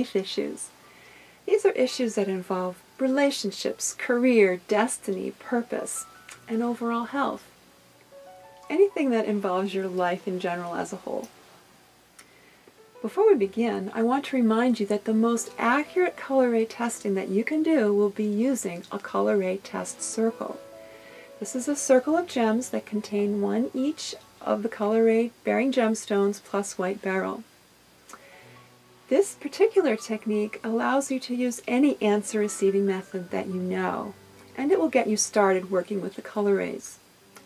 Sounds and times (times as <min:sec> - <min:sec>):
Speech: 0:00.0 - 0:00.7, 0:01.5 - 0:07.5, 0:08.7 - 0:11.3, 0:13.0 - 0:20.6, 0:21.4 - 0:27.4, 0:29.1 - 0:37.0
Music: 0:00.0 - 0:27.5, 0:28.1 - 0:37.4.